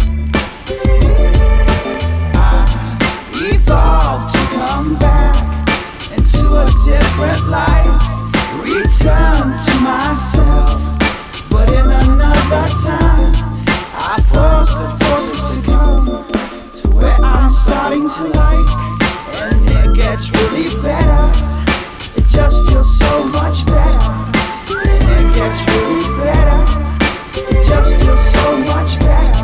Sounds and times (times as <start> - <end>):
Background music: 0.0 - 29.4
Funk: 0.0 - 29.4.